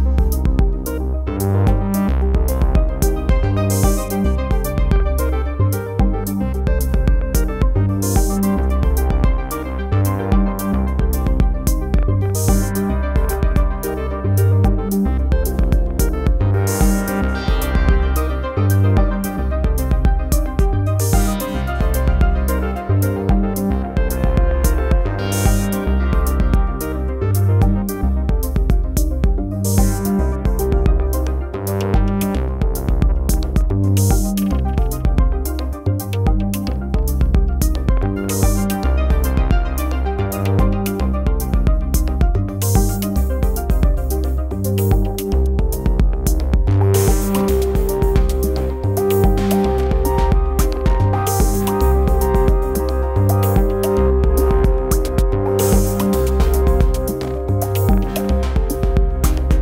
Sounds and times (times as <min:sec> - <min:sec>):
Electronic music: 0:00.0 - 0:59.6
Synthesizer: 0:00.0 - 0:59.6.